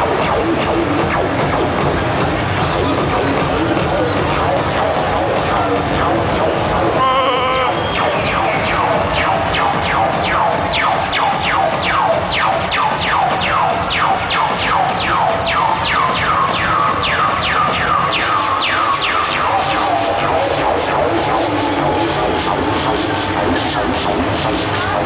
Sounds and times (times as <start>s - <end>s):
Music: 0.0s - 25.0s.